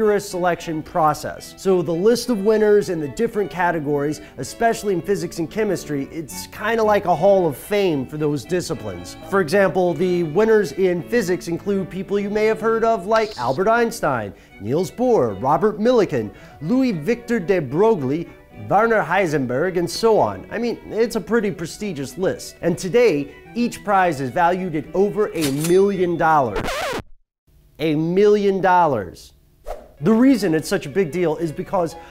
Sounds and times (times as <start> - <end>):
Speech: 0.0 - 26.6, 27.8 - 29.4, 30.0 - 32.0.